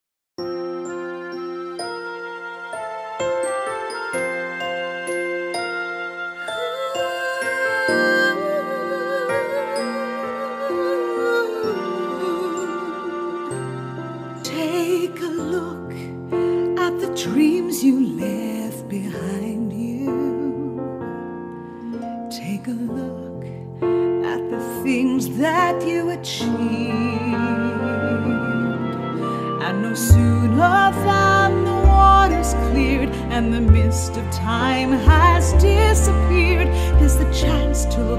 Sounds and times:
Music: 0.4s - 38.1s.

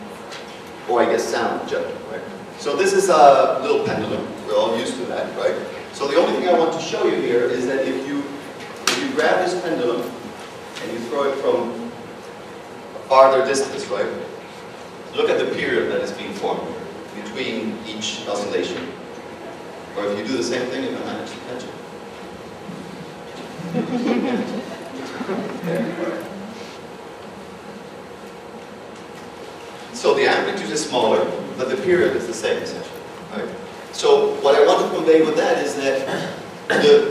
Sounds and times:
Speech: 0.9s - 10.2s, 10.8s - 12.0s, 13.0s - 14.4s, 15.1s - 19.0s, 20.0s - 21.8s, 30.0s - 37.1s.

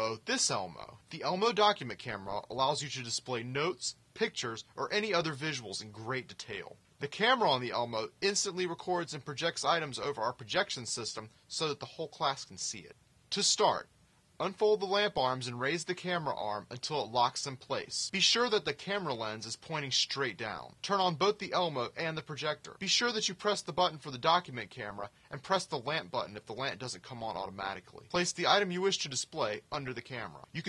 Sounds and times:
Speech: 0.0s - 30.6s.

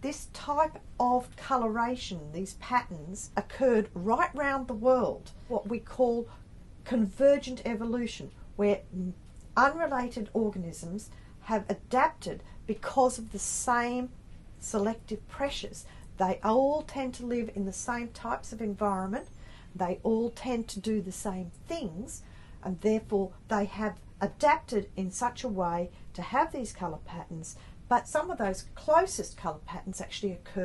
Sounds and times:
Speech: 0.0s - 30.6s.

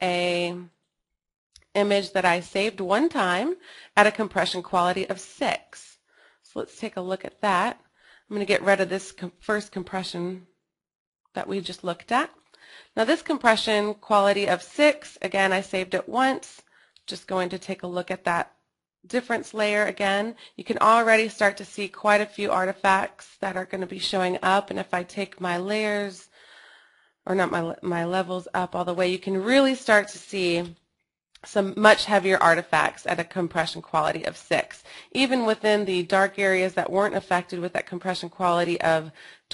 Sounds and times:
Speech: 0.0s - 0.8s, 1.7s - 10.5s, 11.3s - 18.5s, 19.1s - 26.3s, 27.3s - 30.8s, 31.4s - 39.5s.

